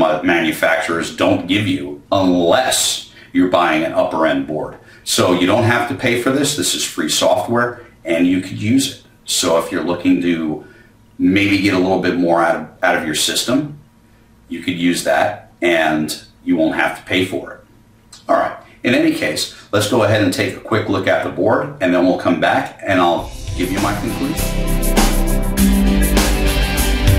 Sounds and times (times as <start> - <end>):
Speech: 0.0 - 13.8, 14.5 - 24.4.